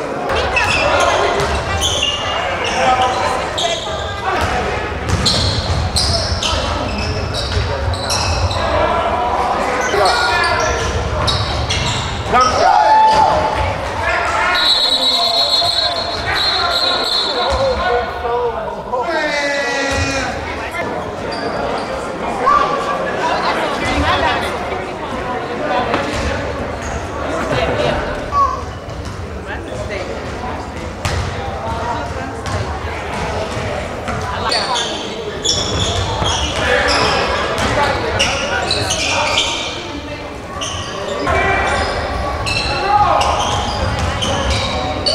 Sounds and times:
Speech: 0:00.0 - 0:45.1
Basketball bounce: 0:04.4 - 0:05.8, 0:31.0 - 0:31.8, 0:32.4 - 0:34.2.

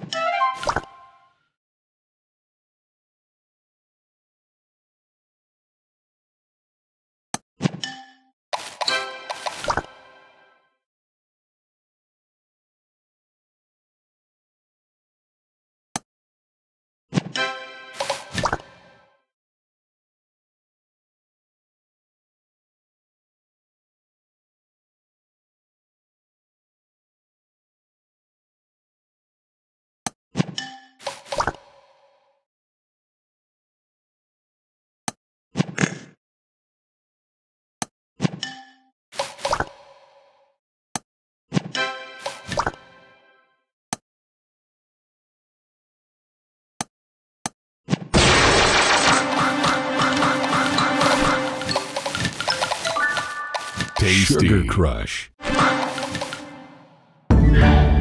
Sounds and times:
Music: 0:00.0 - 0:01.6, 0:08.9 - 0:10.9, 0:17.4 - 0:19.3, 0:41.8 - 0:43.7, 0:49.2 - 0:54.0, 0:55.4 - 0:58.0
Speech: 0:54.0 - 0:55.4.

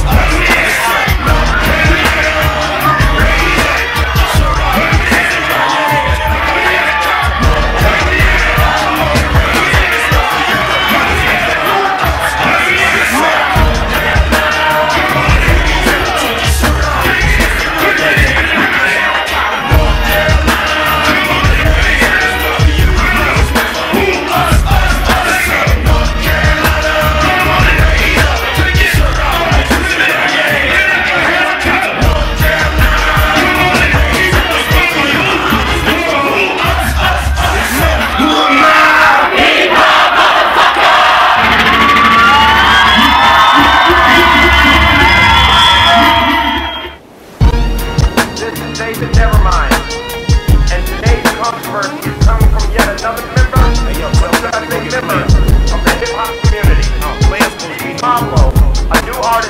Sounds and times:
Inside, public space: 0:00.0 - 0:59.5
Music: 0:00.0 - 0:59.5.

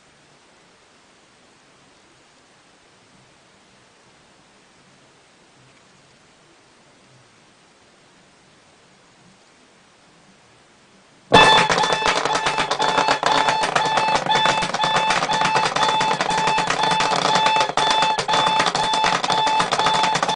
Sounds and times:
Alarm clock: 0:11.3 - 0:20.3.

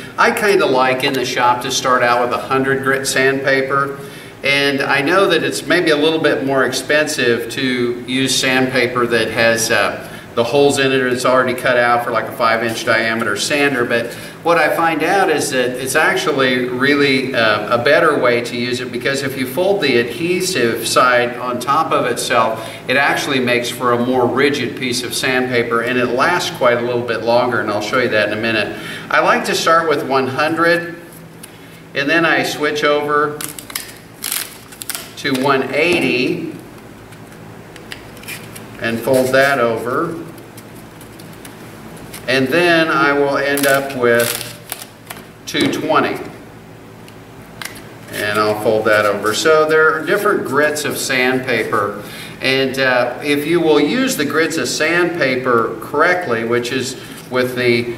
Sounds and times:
Speech: 0:00.2 - 0:31.1, 0:31.9 - 0:33.5, 0:35.2 - 0:36.6, 0:38.8 - 0:40.4, 0:42.3 - 0:44.6, 0:45.5 - 0:46.4, 0:48.1 - 0:57.9.

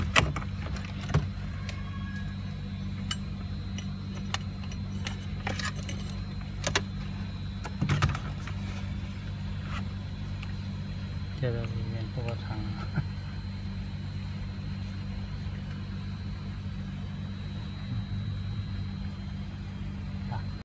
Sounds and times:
Speech: 0:11.4 - 0:13.0, 0:20.2 - 0:20.6.

